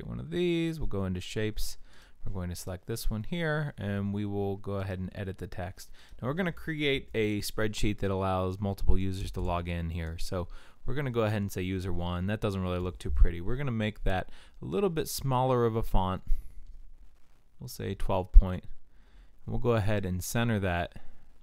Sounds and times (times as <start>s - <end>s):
Speech: 0.0s - 16.3s, 17.6s - 18.8s, 19.5s - 21.1s.